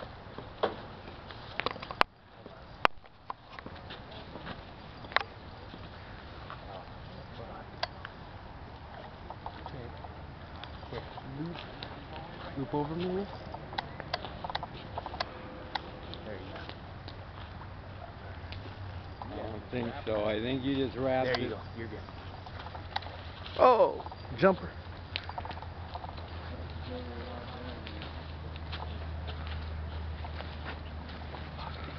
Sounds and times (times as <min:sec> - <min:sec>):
Speech: 0:26.5 - 0:28.2.